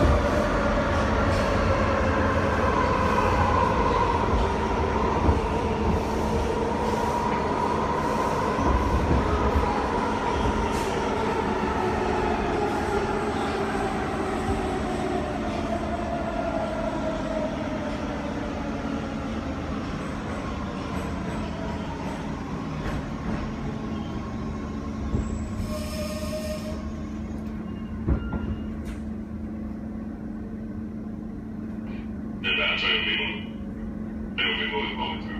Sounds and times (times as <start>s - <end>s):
Railroad car, train wagon: 0.0s - 35.3s
Subway, metro, underground: 0.0s - 35.3s
Train wheels squealing: 25.1s - 29.0s.